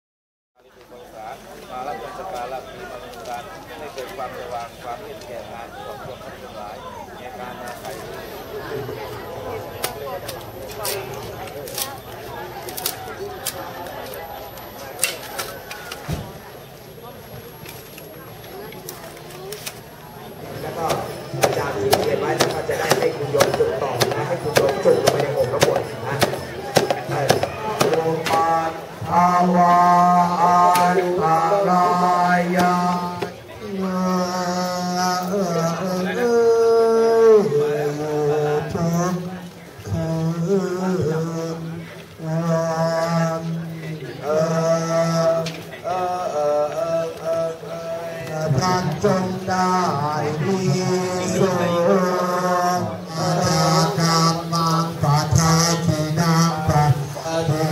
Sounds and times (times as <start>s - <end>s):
Speech: 0.6s - 57.7s.